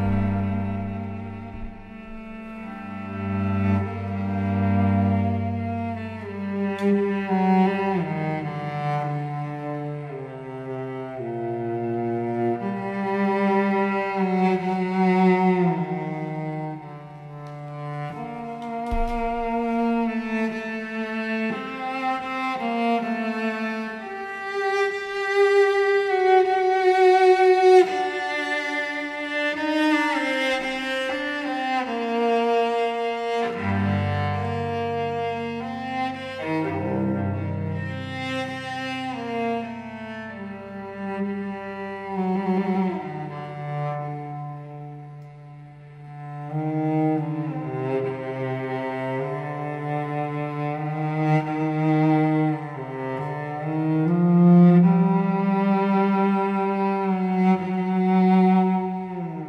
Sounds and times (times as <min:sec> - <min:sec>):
Cello: 0:00.0 - 0:59.4.